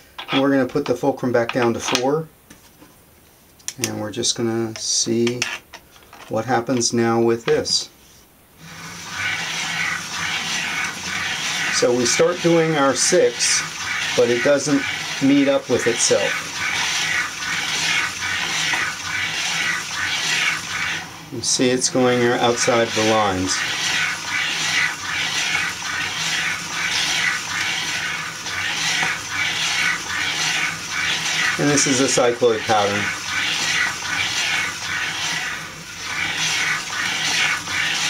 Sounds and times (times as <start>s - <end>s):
Speech: 0.3s - 2.3s, 3.8s - 5.5s, 6.3s - 7.9s, 11.8s - 16.4s, 21.4s - 23.6s, 31.6s - 33.1s.